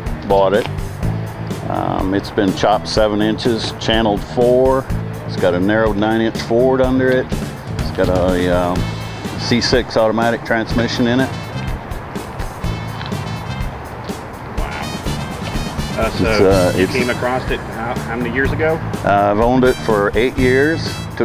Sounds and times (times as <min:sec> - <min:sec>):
Music: 0:00.0 - 0:21.2
Speech: 0:01.7 - 0:07.3, 0:07.9 - 0:08.8, 0:09.4 - 0:11.4, 0:16.0 - 0:21.2.